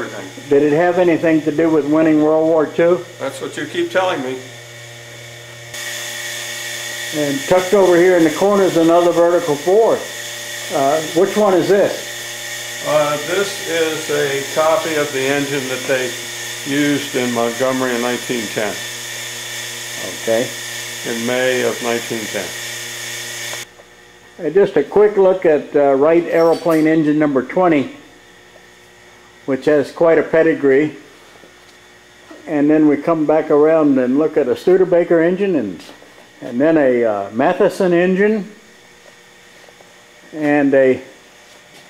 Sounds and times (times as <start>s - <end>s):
Speech: 0.0s - 4.5s, 7.1s - 10.1s, 10.7s - 12.1s, 12.8s - 18.8s, 20.0s - 22.6s, 24.4s - 28.0s, 29.5s - 31.0s, 32.4s - 38.6s, 40.3s - 41.1s.